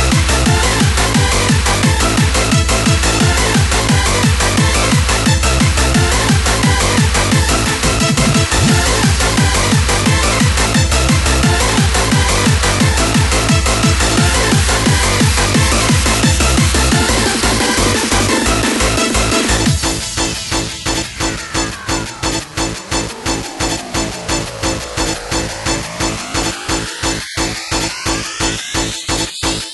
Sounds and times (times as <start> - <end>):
Soundtrack music: 0.0 - 29.7.